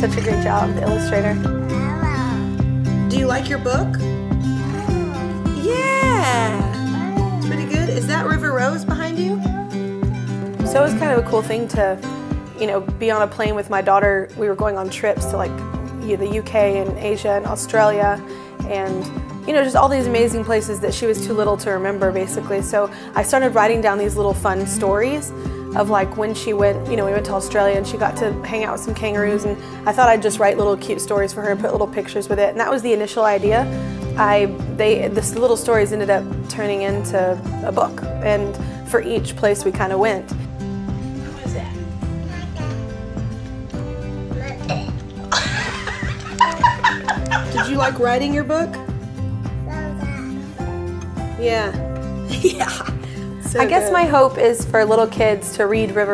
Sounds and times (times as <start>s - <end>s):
Music: 0.0s - 56.1s.